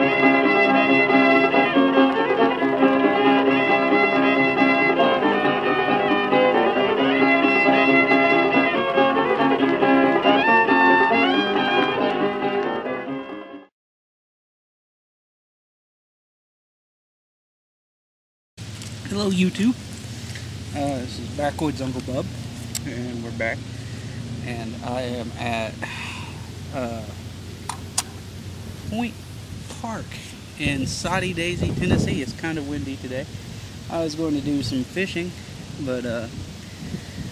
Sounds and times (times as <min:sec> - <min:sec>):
Speech: 0:19.0 - 0:19.8, 0:20.8 - 0:23.6, 0:24.4 - 0:25.9, 0:26.7 - 0:27.2, 0:28.9 - 0:33.3, 0:33.9 - 0:36.3.